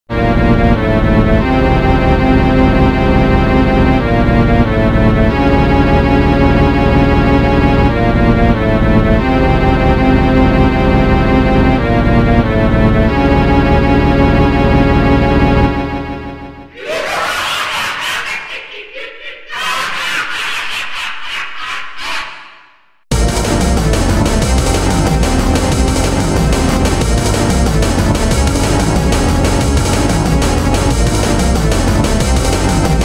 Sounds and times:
Video game music: 0:00.1 - 0:16.8, 0:23.1 - 0:33.0.

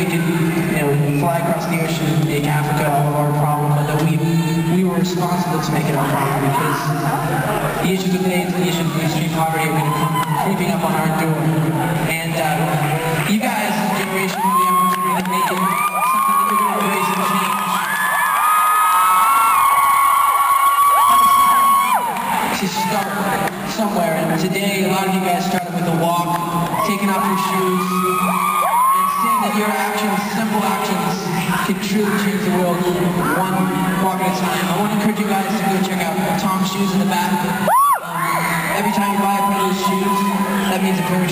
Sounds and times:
Male speech, man speaking: 0:00.0 - 0:17.8, 0:22.5 - 0:41.3.

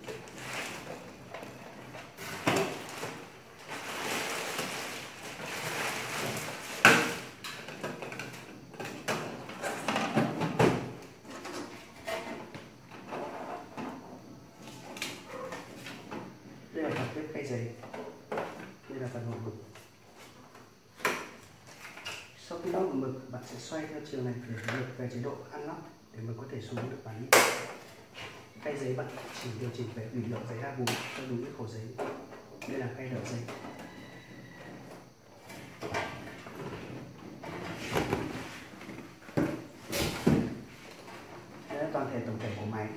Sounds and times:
Speech: 0:16.8 - 0:17.8, 0:18.9 - 0:19.6, 0:22.4 - 0:27.3, 0:28.6 - 0:32.0, 0:32.6 - 0:33.5, 0:41.7 - 0:42.9.

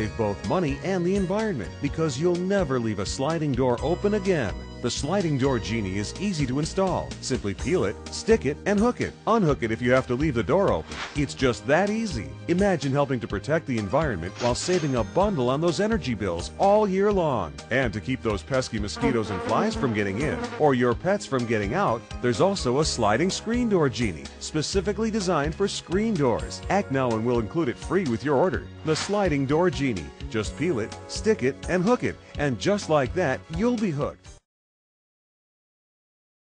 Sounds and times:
Speech: 0:00.0 - 0:34.2
Music: 0:00.0 - 0:34.5.

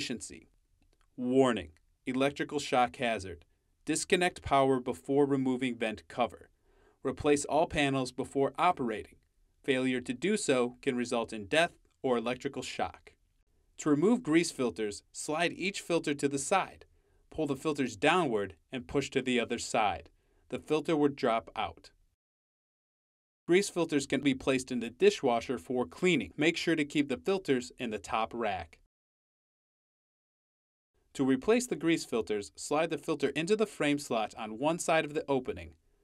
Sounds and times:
Speech: 0:00.0 - 0:00.4, 0:01.2 - 0:09.1, 0:09.7 - 0:13.1, 0:13.8 - 0:21.9, 0:23.5 - 0:28.9, 0:31.2 - 0:35.8.

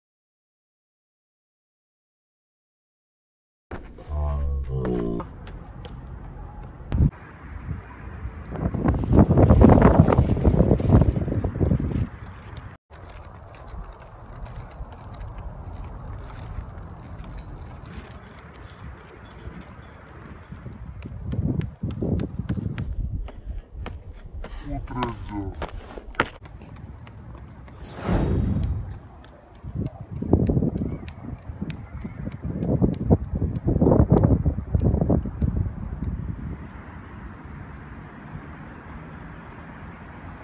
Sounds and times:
Run: 0:05.2 - 0:07.1, 0:16.8 - 0:27.8, 0:28.6 - 0:36.2.

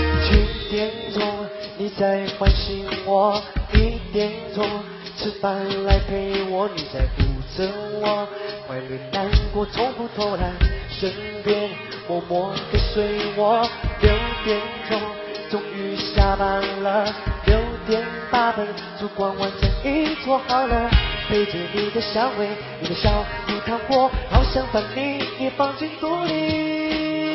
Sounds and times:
Music: 0:00.0 - 0:27.3.

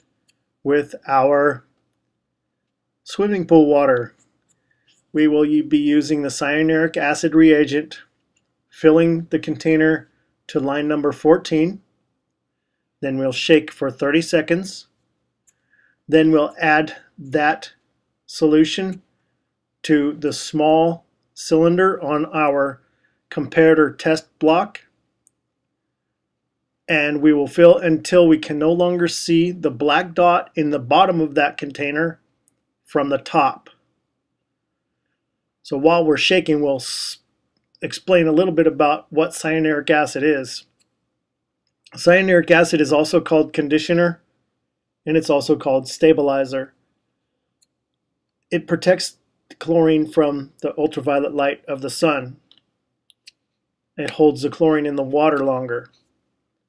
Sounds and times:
Speech: 0:00.7 - 0:01.6, 0:03.1 - 0:04.1, 0:05.2 - 0:08.0, 0:08.8 - 0:11.8, 0:13.0 - 0:14.9, 0:16.1 - 0:19.0, 0:19.8 - 0:24.9, 0:26.9 - 0:32.2, 0:32.9 - 0:33.7, 0:35.6 - 0:37.2, 0:37.8 - 0:40.7, 0:41.9 - 0:44.2, 0:45.1 - 0:46.7, 0:48.5 - 0:52.5, 0:54.0 - 0:55.9.

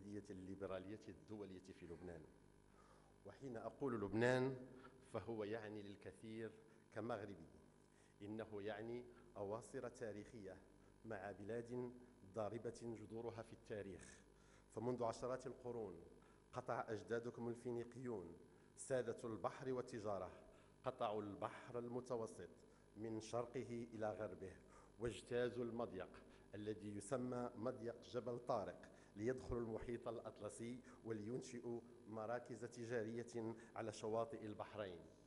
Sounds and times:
Male speech, man speaking: 0:00.0 - 0:02.3, 0:03.3 - 0:07.6, 0:08.2 - 0:35.2.

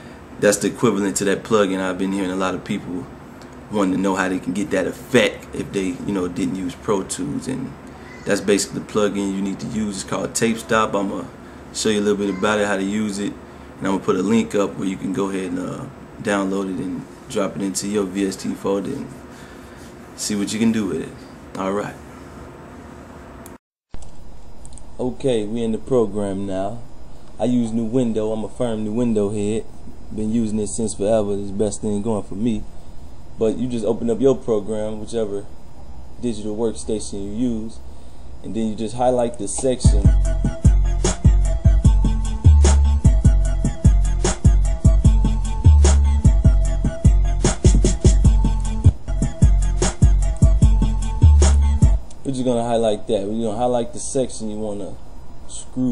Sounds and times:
Speech: 0:00.4 - 0:03.1, 0:03.7 - 0:19.1, 0:20.2 - 0:22.0, 0:25.0 - 0:26.8, 0:27.4 - 0:32.6, 0:33.4 - 0:35.5, 0:36.2 - 0:37.8, 0:38.4 - 0:40.1, 0:52.2 - 0:55.9.

